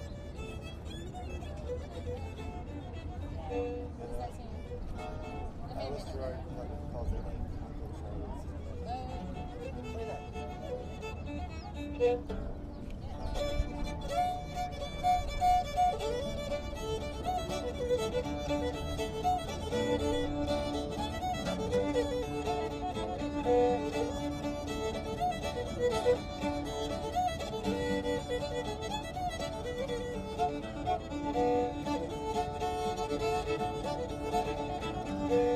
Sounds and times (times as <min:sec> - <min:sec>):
Independent music: 0:13.4 - 0:35.5.